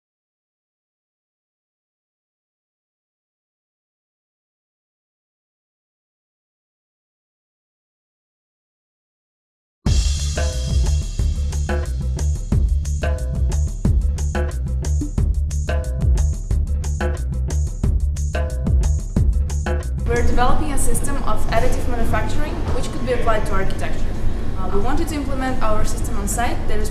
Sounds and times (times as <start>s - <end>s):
Music: 9.9s - 26.9s
Speech: 20.0s - 26.9s.